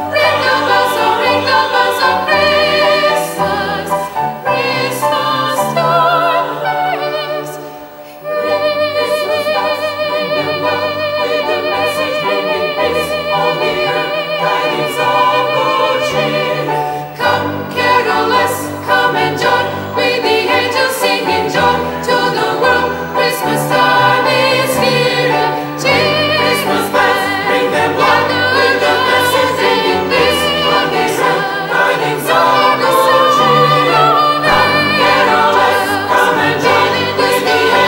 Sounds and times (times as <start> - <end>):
Choir: 0.0 - 37.8
Gospel music: 0.0 - 37.8
Keyboard (musical): 0.0 - 37.8
Opera: 0.0 - 37.8.